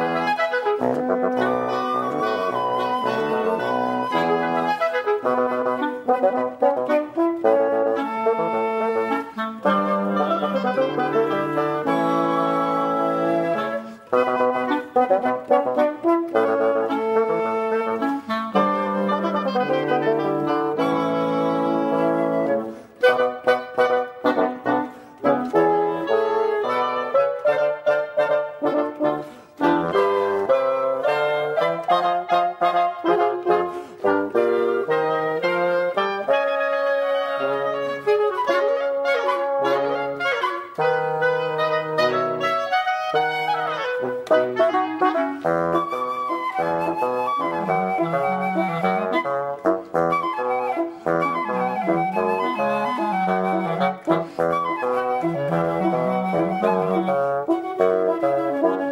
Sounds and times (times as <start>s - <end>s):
Clarinet: 0.0s - 58.9s
French horn: 0.0s - 58.9s.